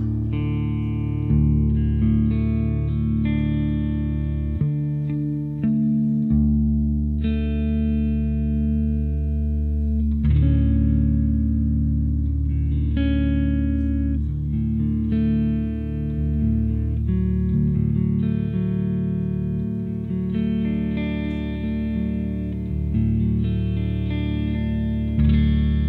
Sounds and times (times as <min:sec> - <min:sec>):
Echo: 0:00.0 - 0:25.8
Guitar: 0:00.0 - 0:25.8
Inside, large room or hall: 0:00.0 - 0:25.8.